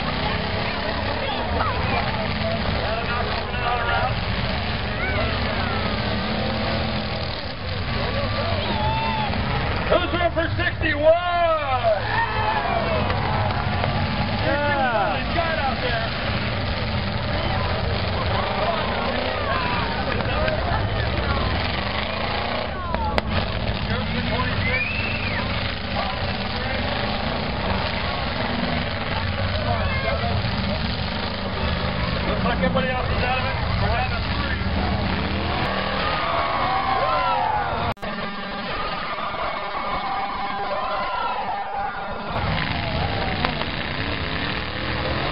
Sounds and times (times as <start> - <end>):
Outside, urban or manmade: 0.0 - 45.3
Truck: 0.0 - 45.3.